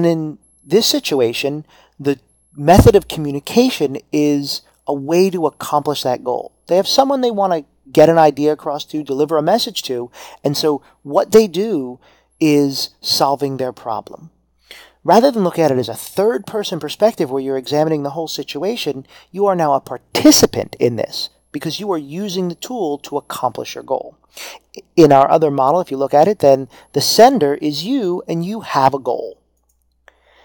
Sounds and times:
Speech: 0:00.0 - 0:14.3, 0:15.1 - 0:24.2, 0:24.8 - 0:29.4.

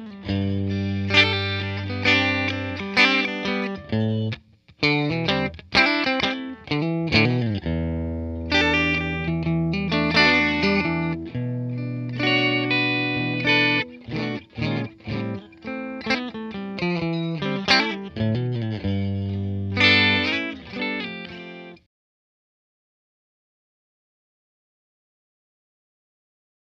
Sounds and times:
Electric guitar: 0:00.0 - 0:21.9.

